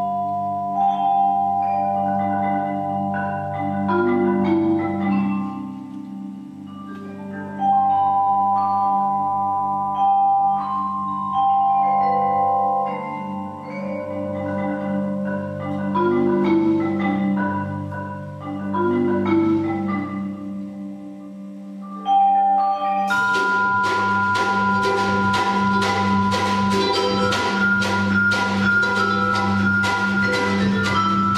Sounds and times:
Glockenspiel: 0.0s - 31.3s
Marimba, xylophone: 0.0s - 31.3s.

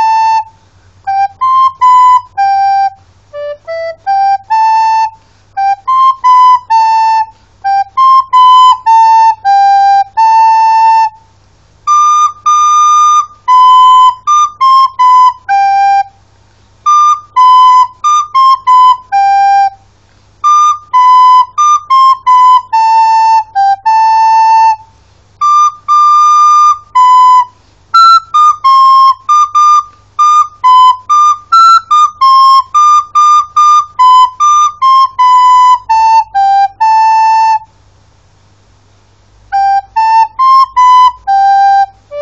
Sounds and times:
Flute: 0.0s - 16.2s, 16.8s - 37.8s, 39.5s - 42.2s
Inside, small room: 0.0s - 42.2s.

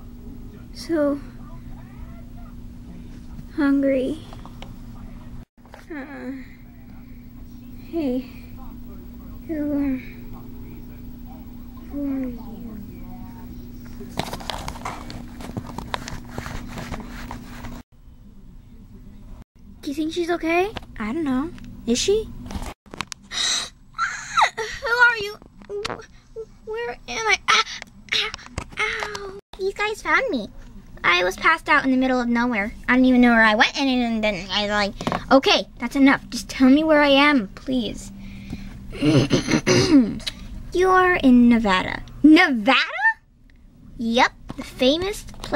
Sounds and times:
Speech: 18.2s - 22.3s, 24.6s - 38.1s, 40.2s - 43.2s, 44.0s - 45.5s.

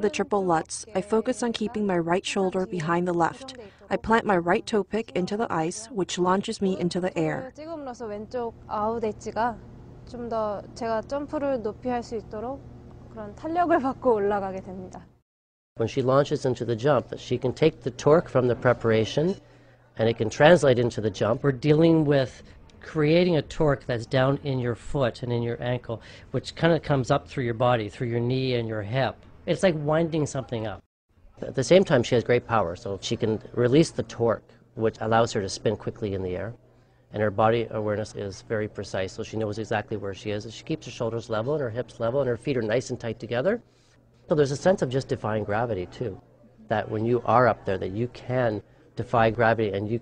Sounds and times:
Speech: 0.0s - 9.4s.

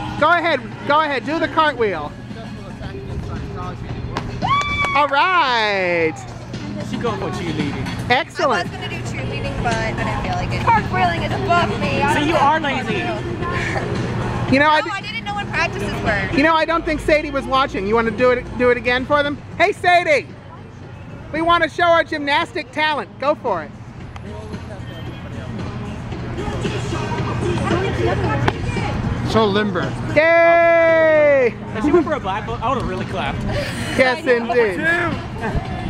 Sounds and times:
Music: 0.0s - 35.8s.

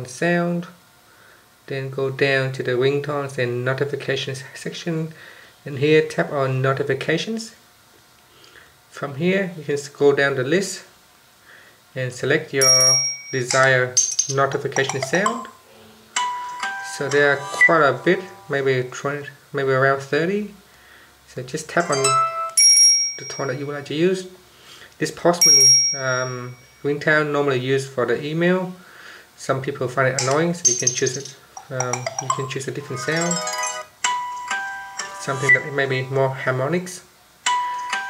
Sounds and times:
Speech: 0.0s - 0.8s, 1.7s - 7.6s, 8.9s - 11.0s, 12.0s - 15.6s, 16.9s - 20.6s, 21.3s - 22.2s, 23.3s - 24.4s, 25.0s - 28.8s, 29.4s - 33.4s, 35.2s - 37.1s
Inside, small room: 0.0s - 38.0s
Ringtone: 12.6s - 18.9s, 21.8s - 23.4s, 30.2s - 36.1s, 37.5s - 38.0s.

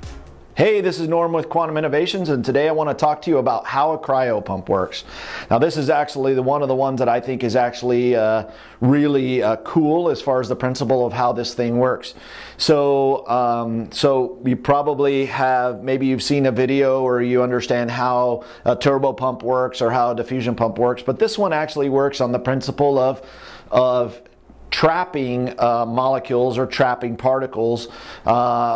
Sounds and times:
Speech: 0.6s - 28.7s.

